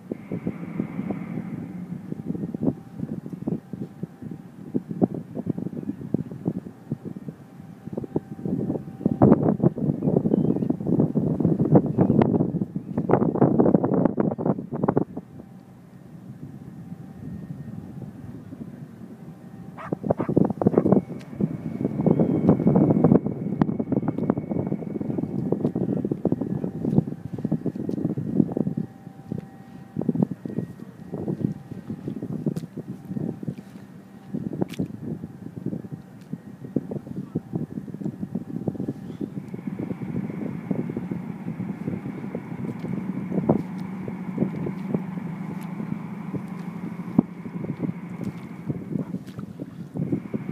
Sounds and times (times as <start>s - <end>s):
Wind noise (microphone): 0.0s - 15.5s, 19.8s - 50.5s.